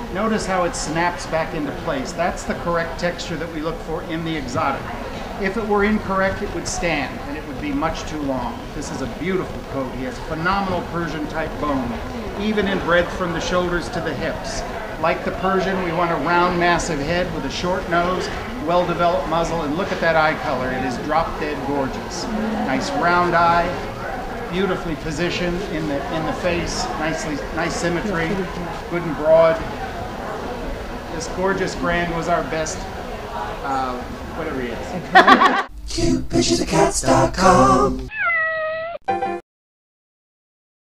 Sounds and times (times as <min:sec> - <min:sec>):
Speech: 0:00.0 - 0:23.9, 0:24.5 - 0:30.0, 0:31.1 - 0:32.9, 0:33.6 - 0:37.8.